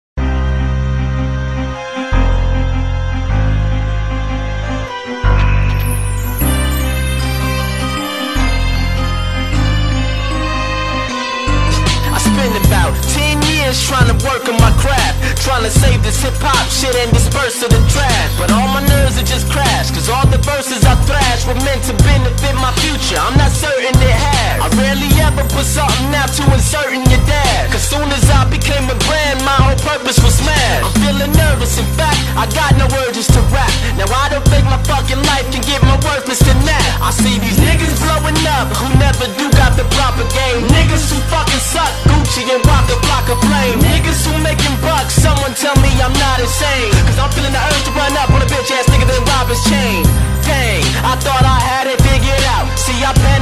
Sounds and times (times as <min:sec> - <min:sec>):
Theme music: 0:00.2 - 0:53.4.